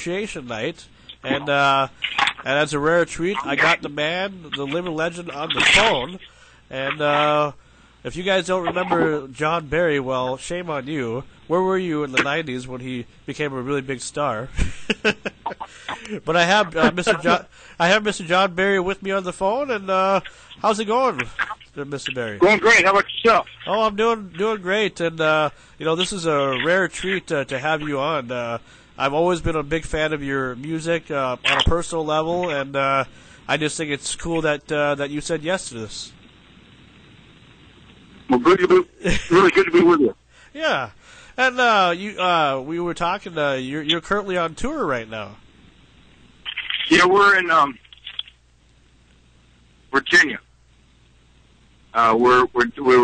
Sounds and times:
Speech: 0.0 - 14.5, 15.5 - 36.2, 38.3 - 45.4, 46.7 - 47.8, 49.9 - 50.5, 51.9 - 53.0.

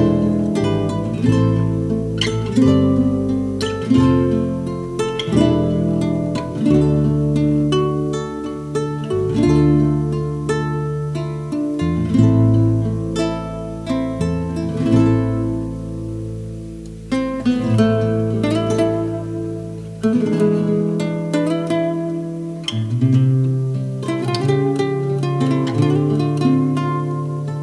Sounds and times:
Strum: 0.0 - 27.6.

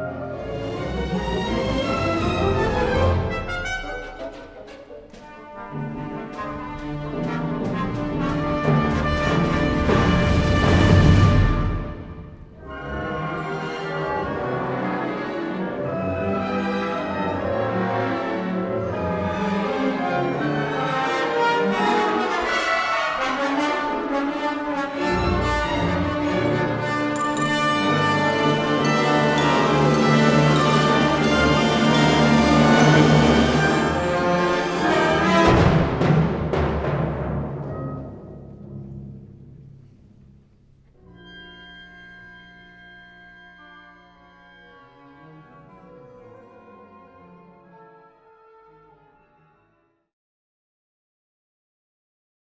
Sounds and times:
Brass instrument: 0.0 - 40.0, 40.9 - 50.1
Timpani: 0.0 - 49.6
Orchestra: 0.0 - 50.1.

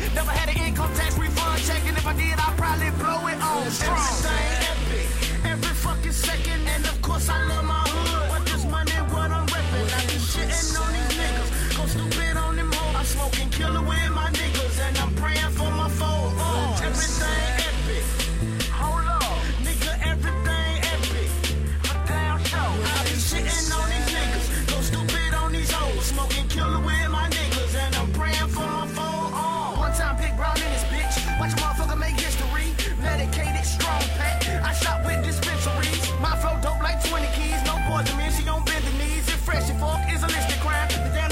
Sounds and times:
Hip hop music: 0.0 - 41.3
Rapping: 0.0 - 41.3.

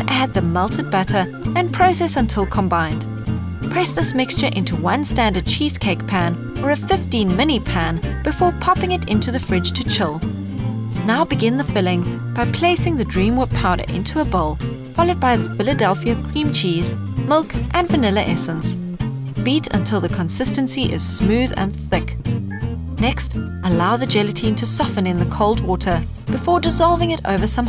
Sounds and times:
Speech: 0.0 - 3.0, 3.7 - 10.2, 11.0 - 18.8, 19.4 - 22.2, 23.0 - 27.6
Music: 0.0 - 27.6.

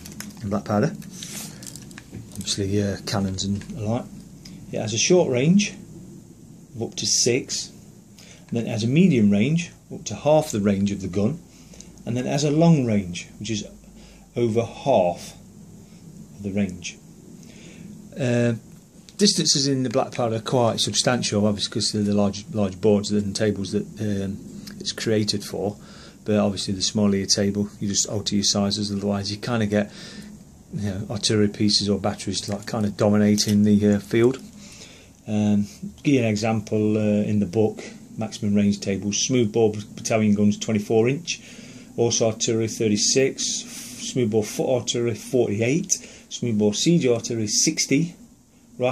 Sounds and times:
Inside, small room: 0.0 - 48.9
Speech: 0.4 - 1.5, 2.3 - 5.8, 6.7 - 7.8, 8.5 - 11.4, 12.0 - 15.4, 16.4 - 17.0, 18.1 - 30.0, 30.7 - 34.5, 35.2 - 41.4, 42.0 - 48.2.

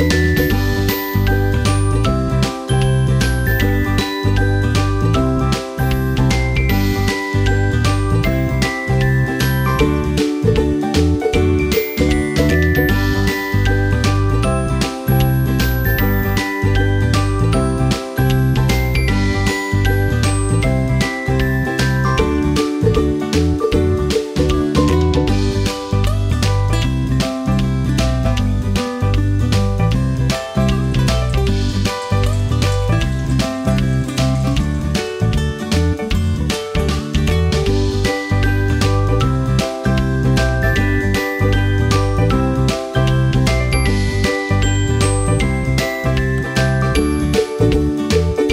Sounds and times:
Music: 0.0 - 48.5.

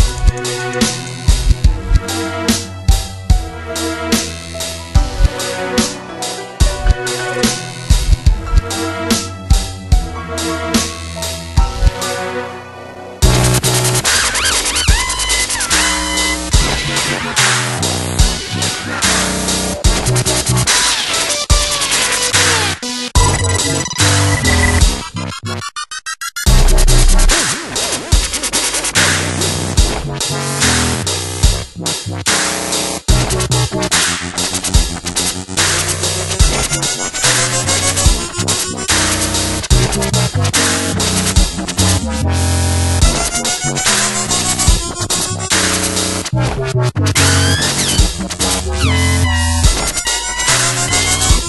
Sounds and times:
Dubstep: 0.0 - 12.2, 13.2 - 51.4.

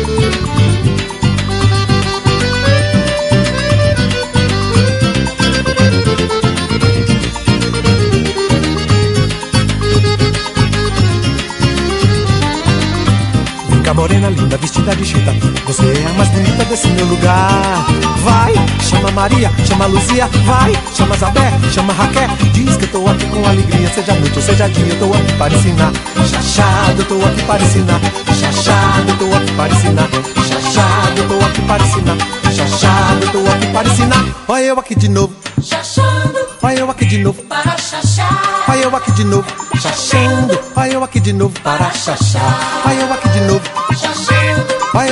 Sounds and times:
Afrobeat: 0.0 - 45.1.

